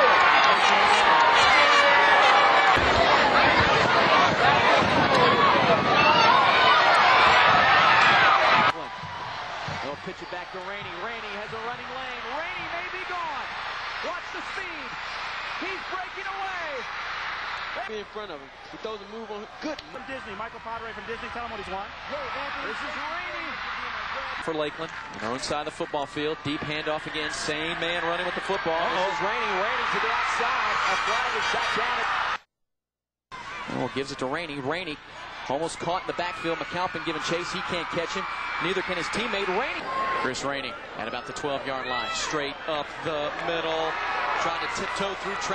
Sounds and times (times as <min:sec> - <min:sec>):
Speech: 0:09.8 - 0:15.0, 0:15.6 - 0:16.8, 0:17.8 - 0:32.1, 0:33.7 - 0:45.5.